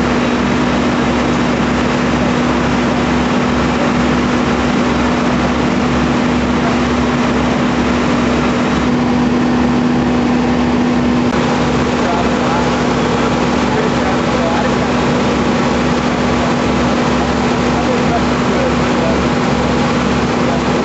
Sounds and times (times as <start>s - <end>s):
Speech: 11.9s - 15.2s, 15.9s - 19.4s, 20.3s - 20.8s.